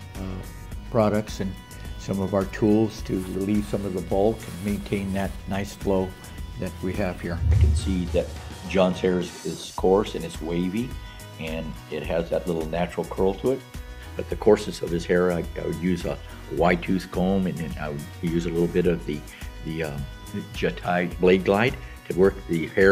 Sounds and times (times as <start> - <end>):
Music: 0.0 - 22.9
Speech: 0.2 - 13.6, 14.2 - 22.9.